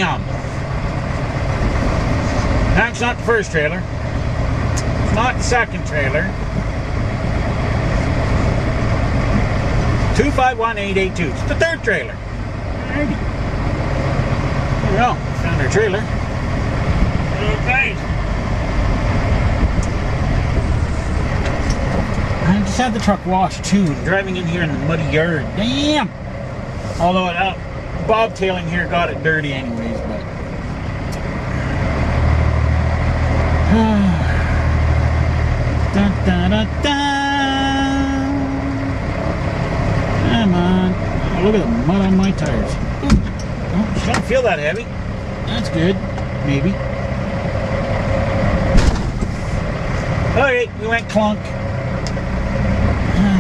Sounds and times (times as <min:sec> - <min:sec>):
Truck: 0:00.0 - 0:53.4
Speech: 0:10.2 - 0:12.2, 0:22.4 - 0:26.2, 0:27.0 - 0:30.3, 0:43.8 - 0:44.9, 0:45.5 - 0:46.8, 0:50.4 - 0:51.6.